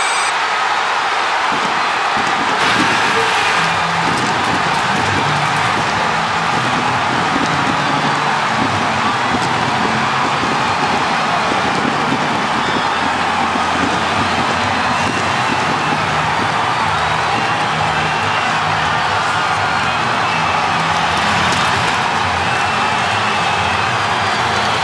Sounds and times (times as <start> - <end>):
Music: 2.6 - 24.8.